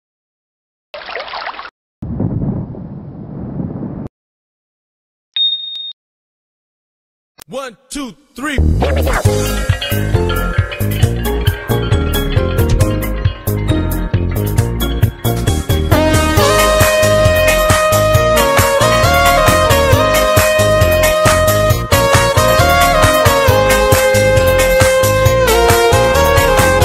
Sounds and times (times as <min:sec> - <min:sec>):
Speech: 0:07.4 - 0:08.7
Music: 0:08.4 - 0:26.8.